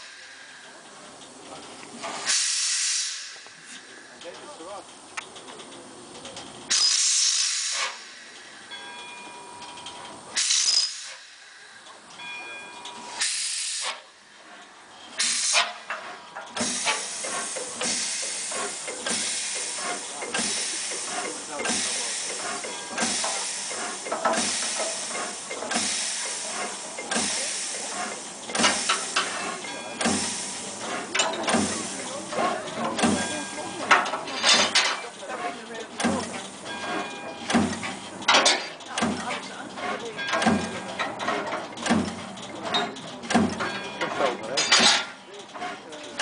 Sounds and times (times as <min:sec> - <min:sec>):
Train: 0:00.0 - 0:46.2.